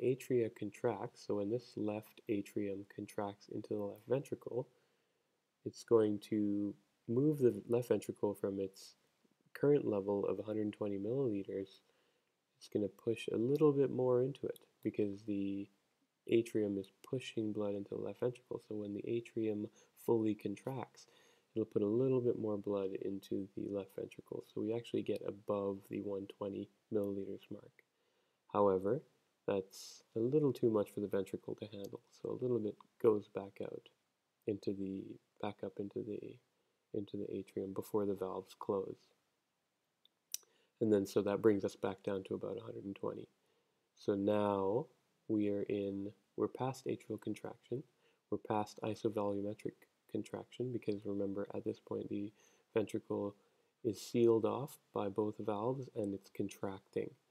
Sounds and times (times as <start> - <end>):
Speech: 0.0 - 4.8, 5.6 - 11.9, 12.6 - 27.8, 28.5 - 39.2, 40.4 - 43.4, 44.0 - 57.3.